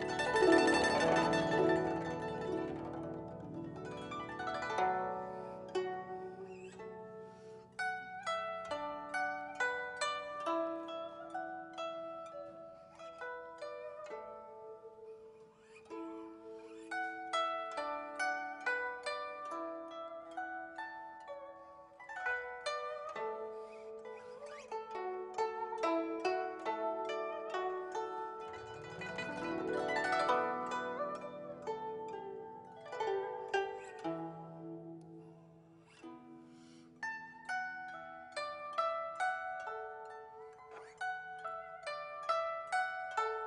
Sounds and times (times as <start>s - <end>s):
Music: 0.0s - 43.4s.